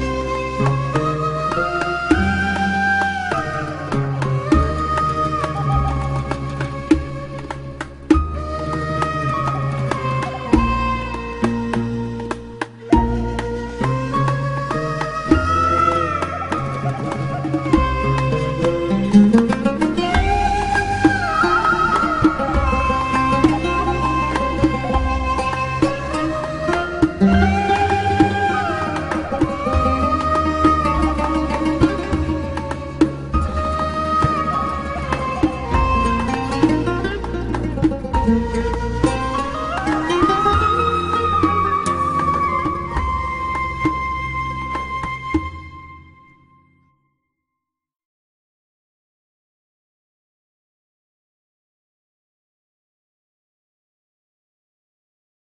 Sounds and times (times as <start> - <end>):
Sad music: 0.0 - 47.0.